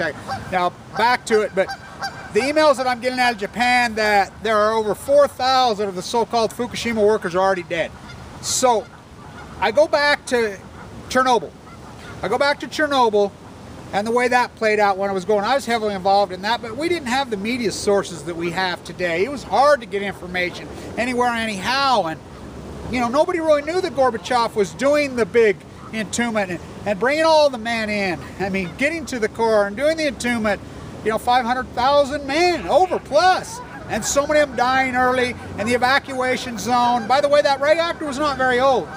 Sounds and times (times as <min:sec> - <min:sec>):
Speech: 0:00.0 - 0:01.8, 0:02.4 - 0:08.9, 0:09.6 - 0:11.5, 0:12.2 - 0:13.3, 0:13.9 - 0:22.2, 0:22.9 - 0:38.9.